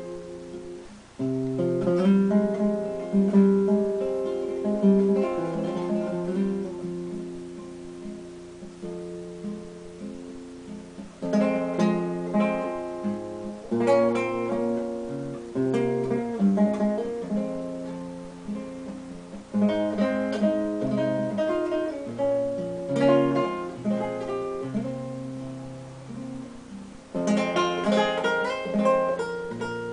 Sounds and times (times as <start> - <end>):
Acoustic guitar: 0.0 - 29.9
Strum: 0.0 - 29.9.